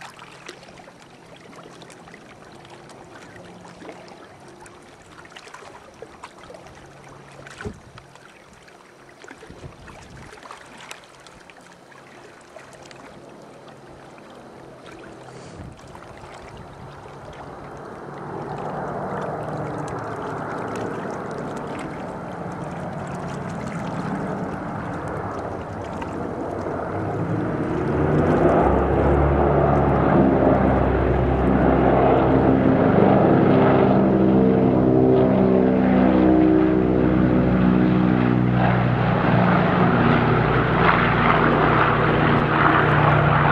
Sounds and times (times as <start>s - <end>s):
Stream: 0.0s - 43.5s.